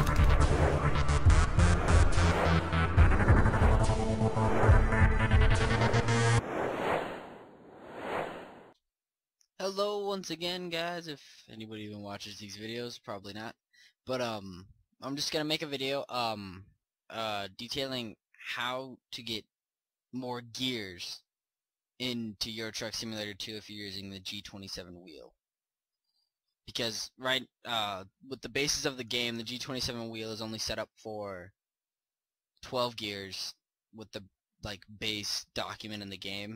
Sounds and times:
Speech: 0:09.6 - 0:19.5, 0:20.2 - 0:21.3, 0:22.0 - 0:25.3, 0:26.7 - 0:31.5, 0:32.6 - 0:36.5.

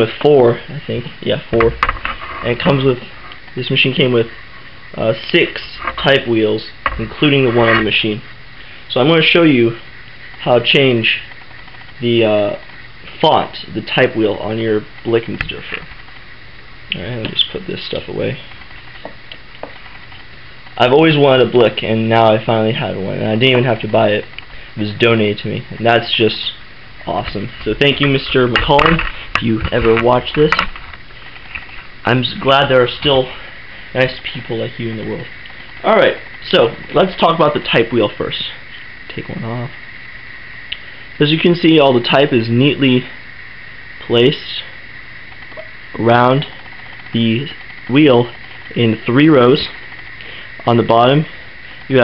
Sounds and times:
Speech: 0:00.0 - 0:01.8, 0:02.4 - 0:08.3, 0:08.9 - 0:11.3, 0:12.0 - 0:15.9, 0:16.9 - 0:18.5, 0:20.8 - 0:30.7, 0:32.0 - 0:39.8, 0:41.2 - 0:43.2, 0:44.0 - 0:44.7, 0:46.0 - 0:49.8, 0:50.6 - 0:52.0.

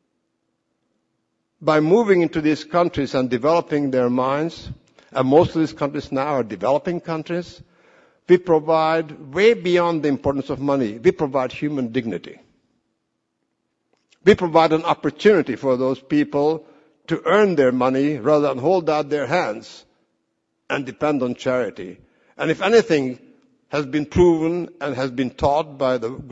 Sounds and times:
Narration, monologue: 0:00.0 - 0:26.3
Male speech, man speaking: 0:01.6 - 0:07.6, 0:08.3 - 0:12.4, 0:14.2 - 0:19.9, 0:20.7 - 0:26.3.

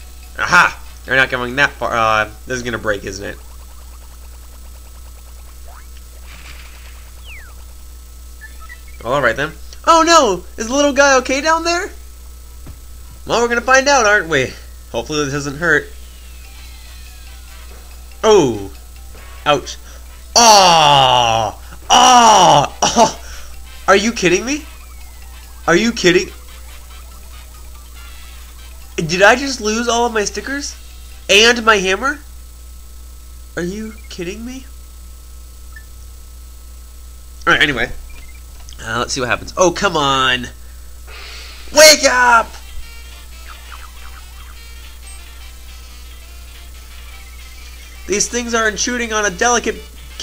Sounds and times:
Music: 0:00.0 - 0:01.9, 0:16.0 - 0:21.0, 0:22.6 - 0:31.3, 0:42.6 - 0:48.6, 0:49.6 - 0:50.2
Speech: 0:00.4 - 0:03.4, 0:09.0 - 0:12.0, 0:13.3 - 0:15.9, 0:23.9 - 0:24.7, 0:25.7 - 0:26.3, 0:29.0 - 0:32.3, 0:33.6 - 0:34.7, 0:37.4 - 0:38.0, 0:38.8 - 0:40.6, 0:41.7 - 0:42.6, 0:48.1 - 0:50.2.

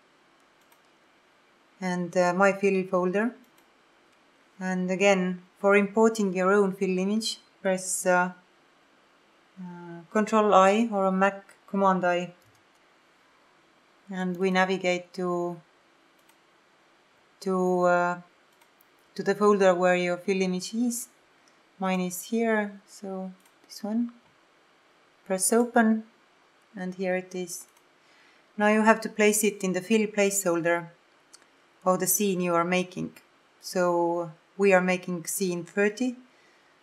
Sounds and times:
Speech: 0:01.8 - 0:03.4, 0:04.6 - 0:08.4, 0:09.6 - 0:12.4, 0:14.1 - 0:15.6, 0:17.4 - 0:18.2, 0:19.2 - 0:21.1, 0:21.8 - 0:24.2, 0:25.3 - 0:26.1, 0:26.8 - 0:27.7, 0:28.6 - 0:30.9, 0:31.9 - 0:36.2.

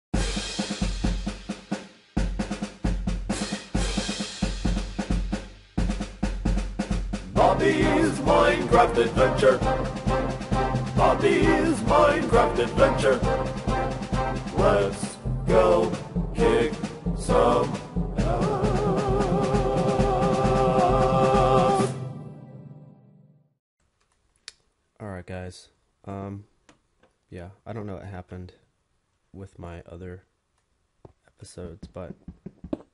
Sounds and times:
Drum kit: 0:00.1 - 0:21.9
Bass drum: 0:02.2 - 0:21.8.

